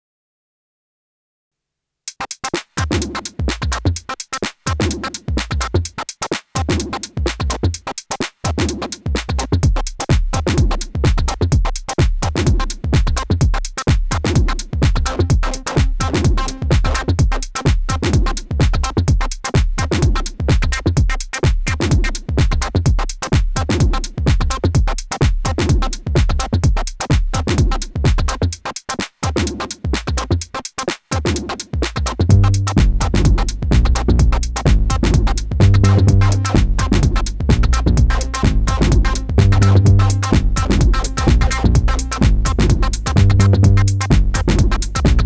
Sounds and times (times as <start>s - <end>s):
Drum machine: 2.1s - 45.2s
Electronic music: 8.8s - 26.6s, 31.6s - 45.2s.